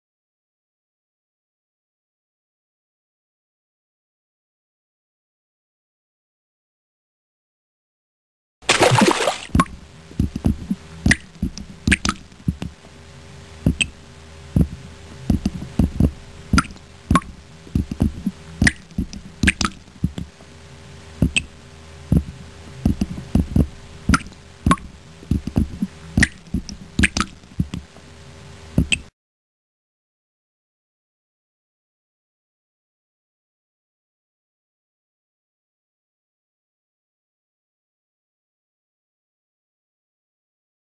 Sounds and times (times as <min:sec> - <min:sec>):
Water: 0:08.6 - 0:12.7, 0:16.5 - 0:20.3, 0:24.1 - 0:27.9.